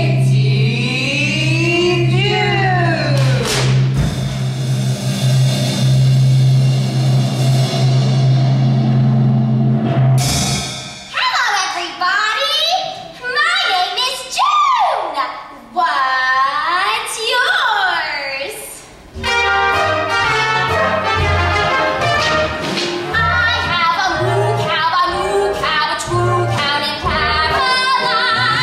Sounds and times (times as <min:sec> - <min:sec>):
Music: 0:00.0 - 0:11.3, 0:19.1 - 0:28.6.